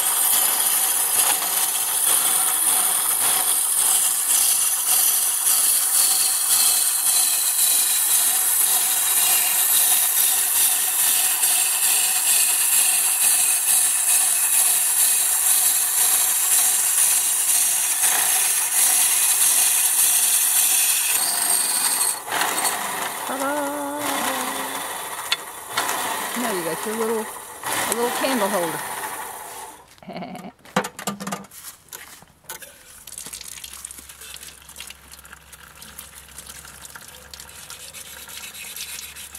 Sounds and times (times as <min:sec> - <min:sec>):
Tools: 0:00.0 - 0:22.8.